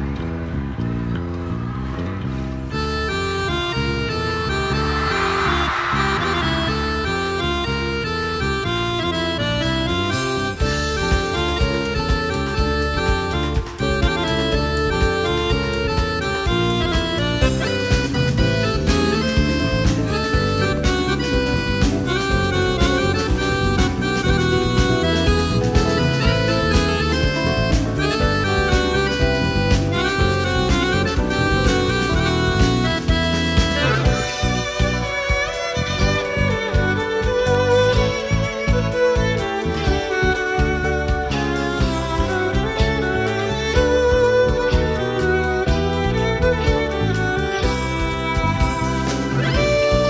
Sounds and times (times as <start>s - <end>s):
Music: 0.0s - 50.1s.